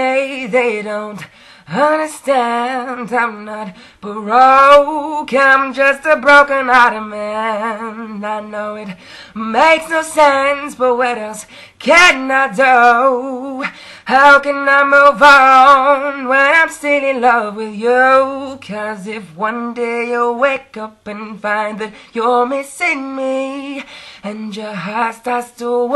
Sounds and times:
Male singing: 0.0 - 25.9.

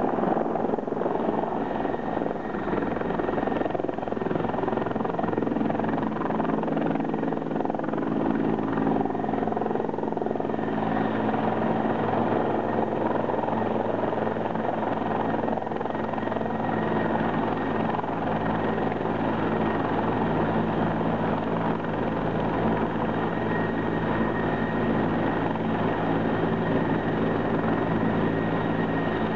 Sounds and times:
Helicopter: 0.0 - 29.3.

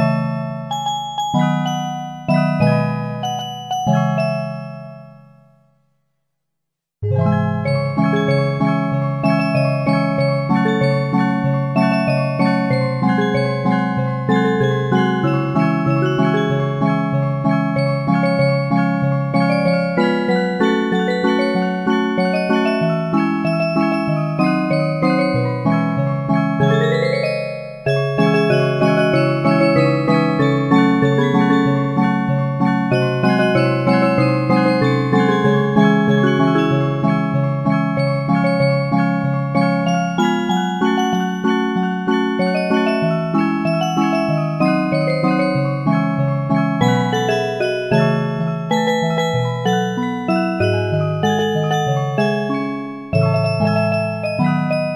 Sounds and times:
Music: 0.0 - 6.2, 7.0 - 54.9.

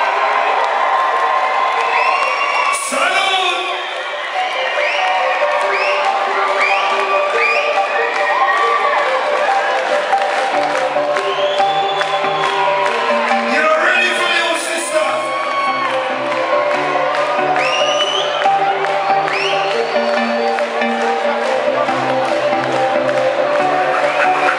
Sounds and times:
Cheering: 0.0 - 24.5
Crowd: 0.0 - 24.5.

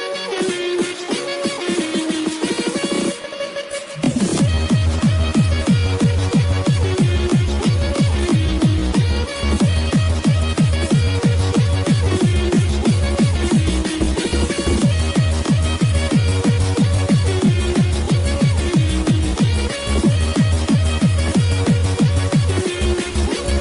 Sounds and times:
Exciting music: 0.0 - 23.6
Soundtrack music: 0.0 - 23.6.

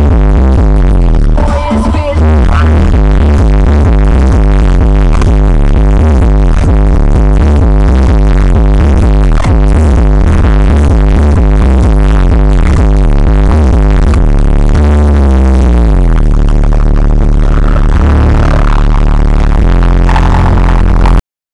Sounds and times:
Music: 0.0 - 21.2.

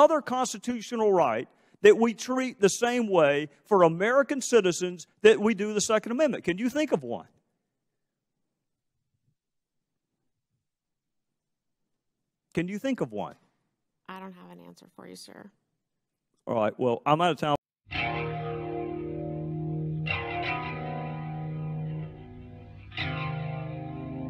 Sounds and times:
Speech: 0.0 - 7.3, 12.6 - 13.4, 16.5 - 17.6
Music: 17.9 - 24.3.

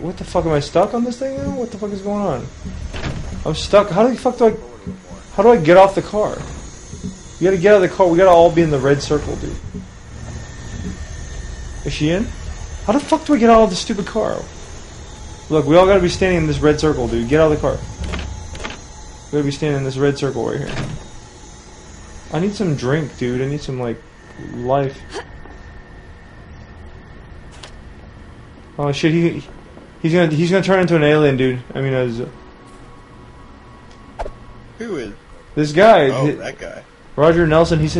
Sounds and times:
Speech: 0.0 - 2.5, 3.4 - 6.4, 7.4 - 9.6, 11.9 - 12.3, 12.9 - 14.5, 15.5 - 17.8, 19.4 - 20.8, 22.3 - 25.2, 28.8 - 32.4, 34.8 - 37.9.

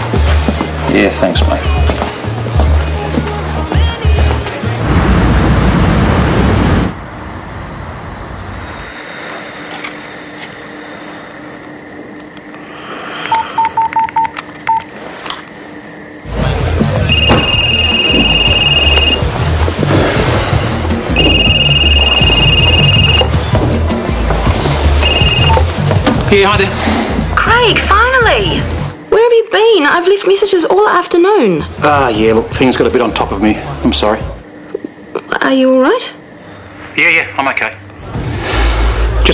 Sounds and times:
Telephone dialing, DTMF: 13.3 - 14.9, 21.2 - 23.3, 25.0 - 25.6.

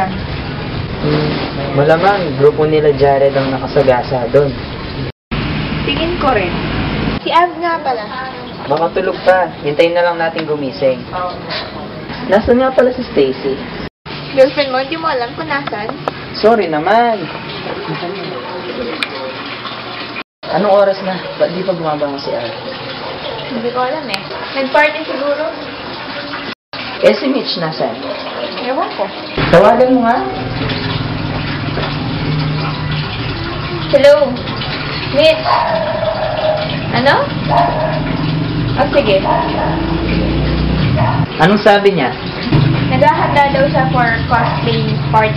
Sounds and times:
Outside, urban or manmade: 0.0 - 3.6, 4.2 - 18.2, 29.0 - 41.4, 42.1 - 45.3.

